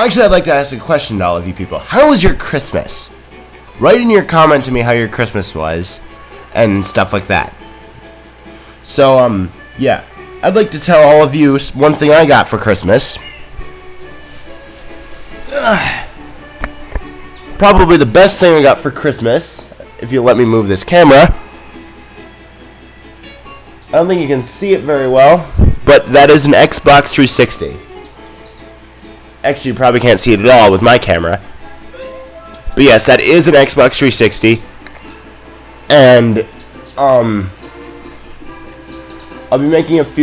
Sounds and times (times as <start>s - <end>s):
Speech: 0.0s - 3.1s, 3.8s - 6.0s, 6.6s - 7.5s, 8.8s - 13.3s, 17.6s - 21.4s, 23.9s - 27.8s, 29.4s - 31.4s, 32.7s - 34.6s, 35.9s - 37.5s, 39.5s - 40.2s
Music: 0.0s - 40.2s.